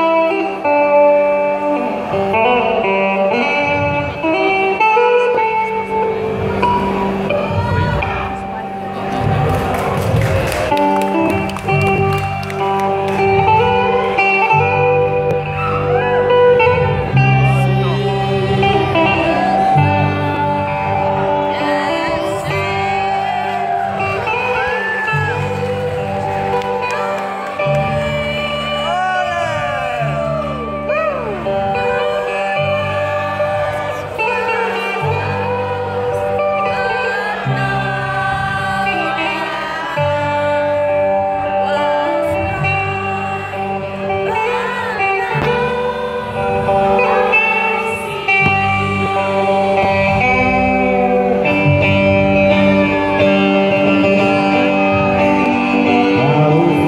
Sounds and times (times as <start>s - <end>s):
Country: 0.0s - 56.8s
Soul music: 0.0s - 56.8s.